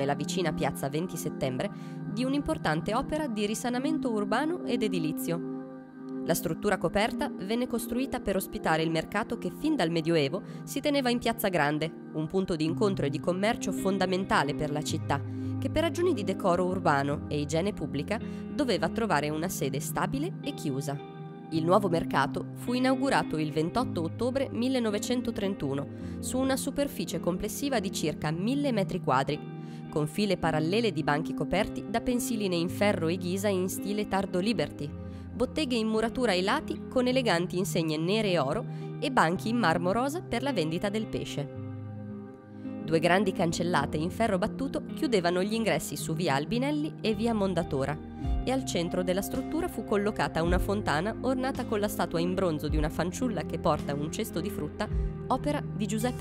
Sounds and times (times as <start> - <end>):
Speech: 0.0 - 5.4, 6.3 - 21.0, 21.6 - 29.4, 30.0 - 41.5, 42.9 - 56.2
Music: 0.0 - 56.2.